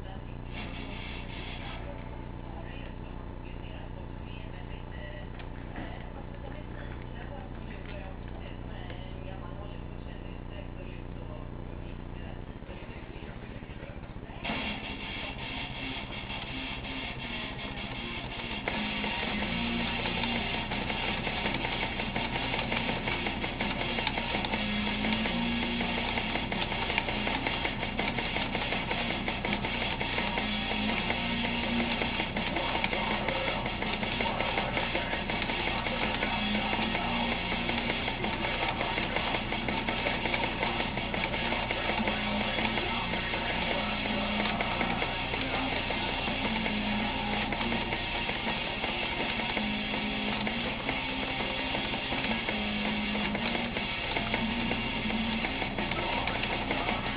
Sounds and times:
Electric guitar: 14.4 - 57.1.

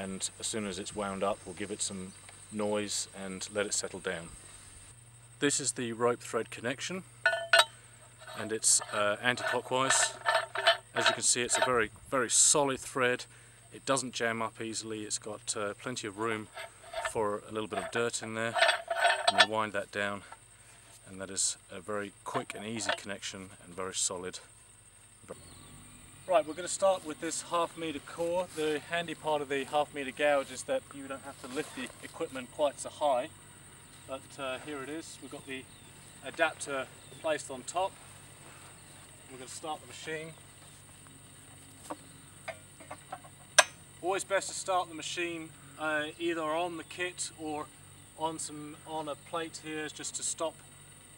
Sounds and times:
Speech: 0.0 - 4.4, 5.4 - 7.1, 8.4 - 10.2, 11.0 - 16.5, 17.1 - 18.6, 19.3 - 20.3, 21.0 - 24.5, 26.3 - 33.3, 34.1 - 38.0, 39.3 - 40.4, 44.0 - 50.6.

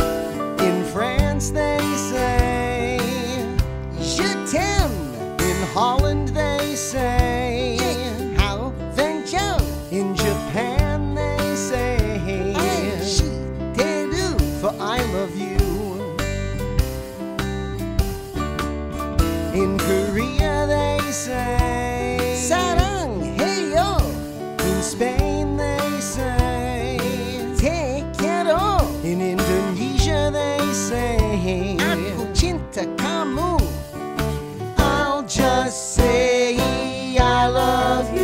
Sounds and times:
Music for children: 10.6 - 38.2.

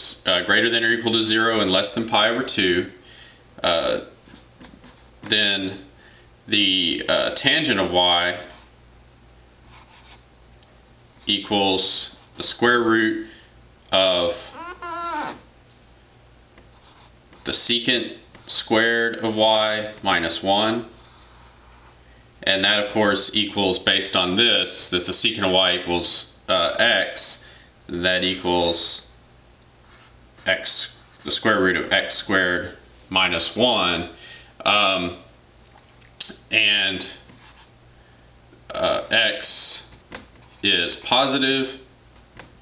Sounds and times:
Speech: 0.0 - 3.0, 3.6 - 4.2, 5.3 - 5.9, 6.5 - 8.6, 11.2 - 13.3, 13.9 - 14.6, 17.4 - 21.0, 22.4 - 29.1, 30.4 - 35.3, 36.2 - 37.3, 38.7 - 40.0, 40.6 - 41.9
Inside, small room: 0.0 - 42.6
Writing: 4.2 - 5.3, 9.7 - 10.2, 16.6 - 17.7, 20.9 - 22.0, 29.8 - 31.5, 37.3 - 37.7.

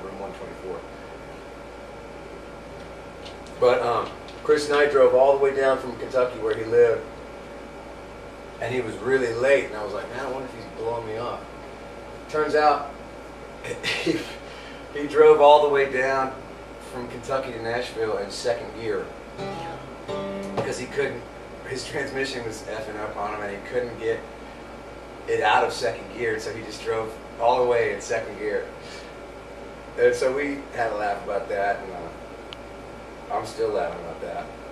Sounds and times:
Speech: 0.0 - 0.9, 3.5 - 7.1, 8.6 - 11.5, 12.3 - 13.0, 13.6 - 19.2, 20.6 - 24.3, 25.3 - 28.8, 30.0 - 32.2, 33.3 - 34.6
Music: 19.4 - 20.9.

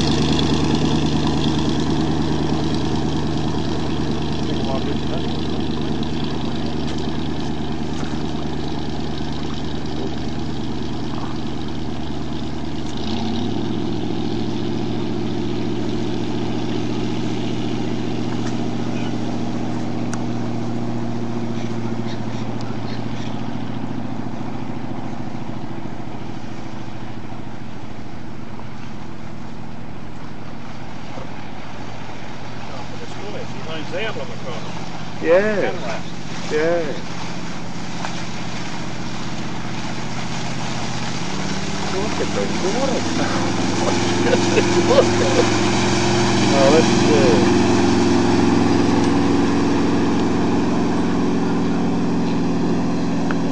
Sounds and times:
Motorboat, speedboat: 0.0 - 53.5.

